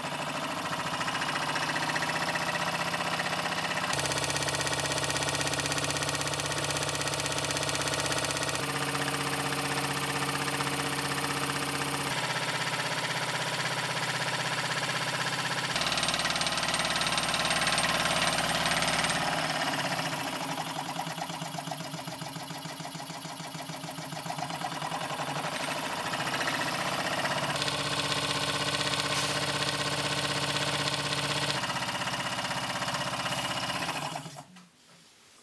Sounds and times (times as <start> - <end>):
Medium engine (mid frequency): 0.0 - 34.5.